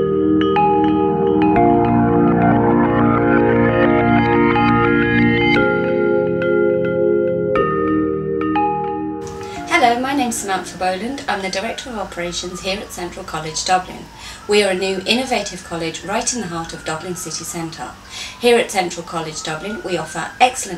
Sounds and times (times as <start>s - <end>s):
Music: 0.0s - 11.6s
Speech: 9.7s - 20.7s.